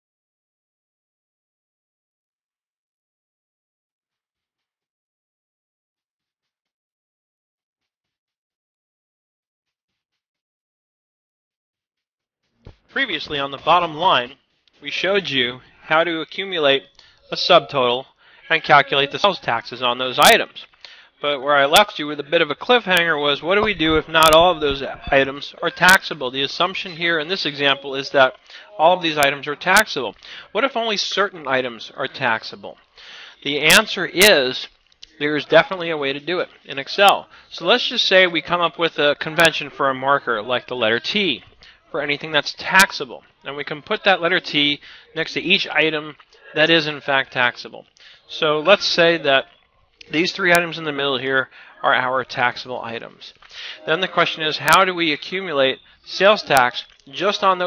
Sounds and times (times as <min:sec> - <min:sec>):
Speech: 0:13.0 - 0:32.8, 0:33.4 - 0:57.6.